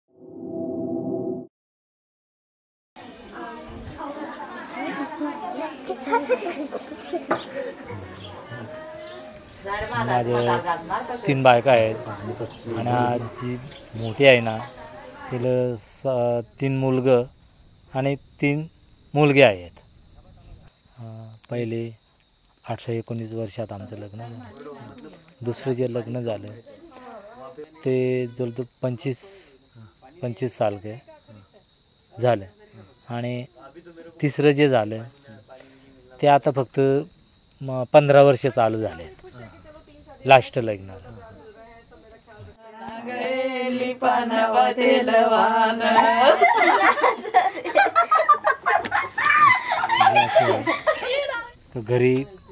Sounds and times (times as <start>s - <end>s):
Outside, rural or natural: 3.0s - 43.2s, 43.8s - 52.5s.